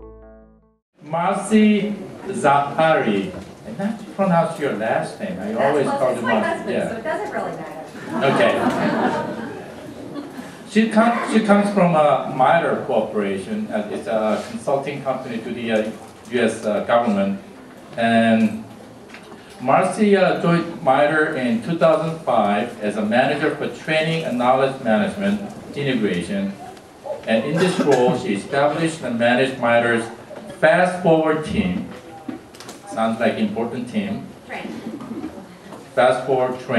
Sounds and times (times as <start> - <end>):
Speech: 1.0 - 8.9, 10.7 - 17.4, 18.0 - 18.6, 19.6 - 26.6, 27.3 - 34.8, 36.0 - 36.7.